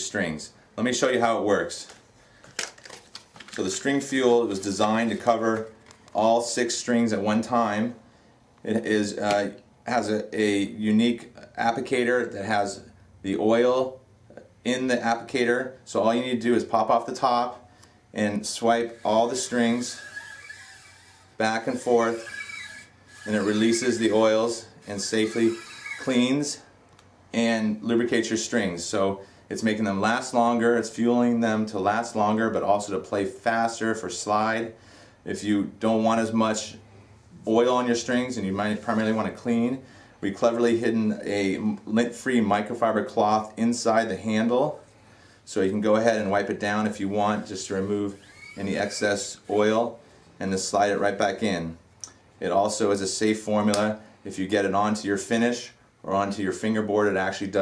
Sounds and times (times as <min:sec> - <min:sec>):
Speech: 0:00.0 - 0:02.0, 0:03.6 - 0:08.0, 0:08.6 - 0:17.6, 0:18.2 - 0:20.0, 0:21.4 - 0:22.3, 0:23.3 - 0:26.6, 0:27.3 - 0:36.8, 0:37.4 - 0:44.8, 0:45.5 - 0:51.8, 0:52.4 - 0:57.6.